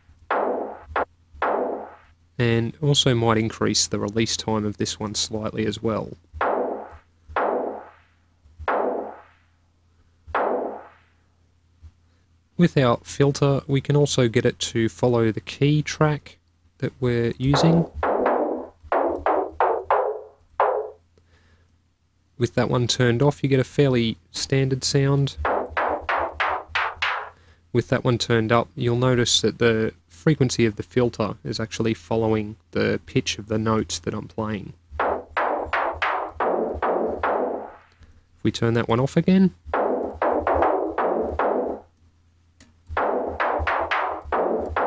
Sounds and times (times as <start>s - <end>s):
Speech: 2.4s - 6.2s, 12.6s - 17.9s, 22.4s - 25.4s, 27.7s - 34.8s, 38.4s - 39.6s.